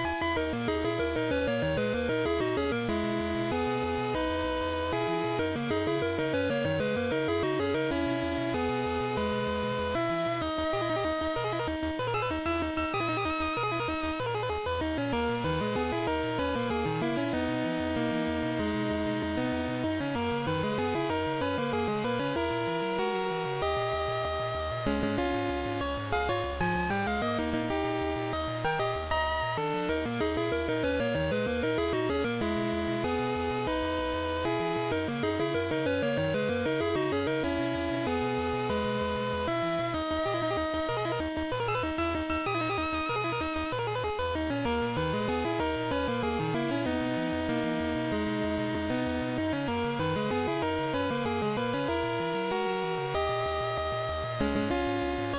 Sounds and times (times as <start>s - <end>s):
Video game music: 0.0s - 55.3s.